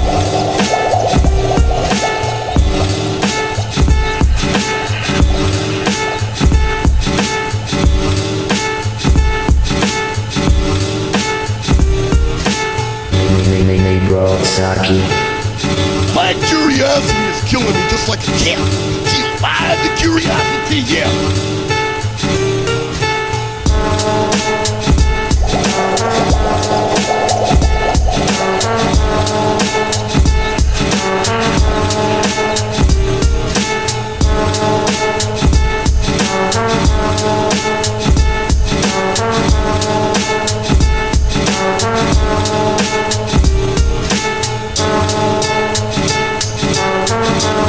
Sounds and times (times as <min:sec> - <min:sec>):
Music: 0:00.0 - 0:47.6.